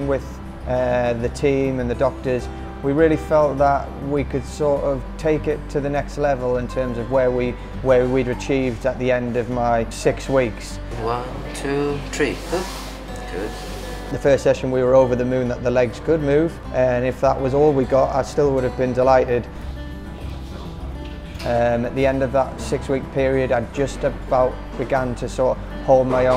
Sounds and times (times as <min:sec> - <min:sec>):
Speech: 0:00.0 - 0:12.7
Music: 0:00.0 - 0:26.3.